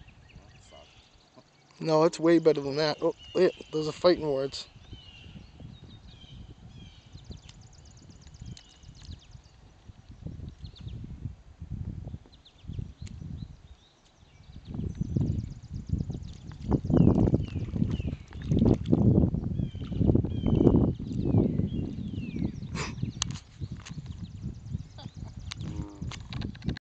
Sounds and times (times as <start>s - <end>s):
Animal: 25.0s - 26.7s.